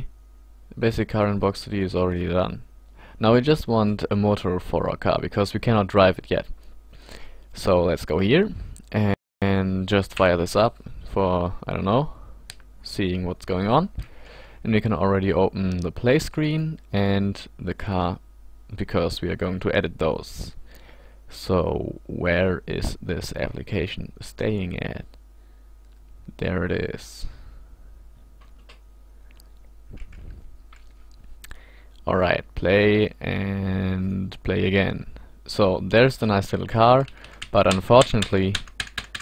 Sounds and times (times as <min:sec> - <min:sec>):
Speech: 0:00.7 - 0:06.5, 0:07.6 - 0:12.2, 0:12.8 - 0:14.0, 0:14.6 - 0:20.6, 0:21.3 - 0:25.2, 0:26.3 - 0:27.4, 0:32.0 - 0:38.6.